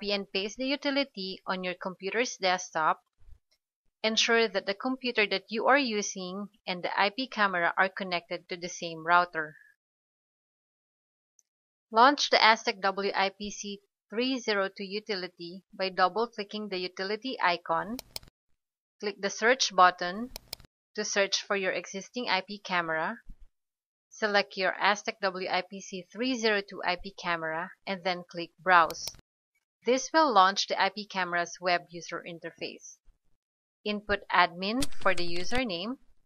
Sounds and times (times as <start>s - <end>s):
Speech: 0.0s - 3.0s, 4.1s - 9.6s, 12.0s - 18.0s, 19.0s - 20.3s, 21.0s - 23.2s, 24.2s - 29.2s, 29.9s - 33.0s, 33.9s - 36.0s.